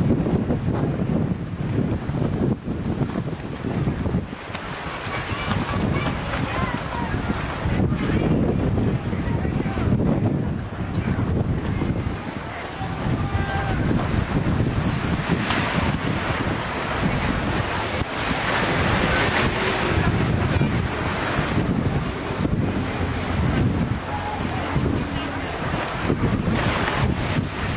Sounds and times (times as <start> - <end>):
Speech: 5.1 - 13.9, 24.0 - 25.9.